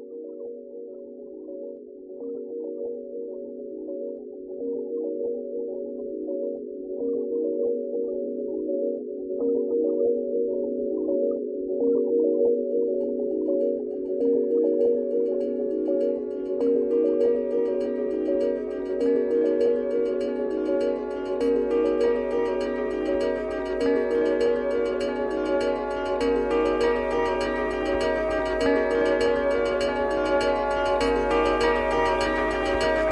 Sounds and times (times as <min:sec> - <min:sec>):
Singing bowl: 0:09.6 - 0:33.1.